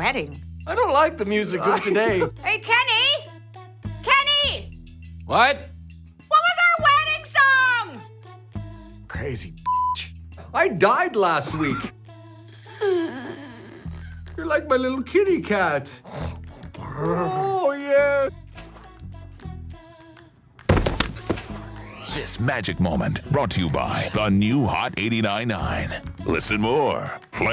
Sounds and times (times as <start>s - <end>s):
Music: 0.0s - 27.5s.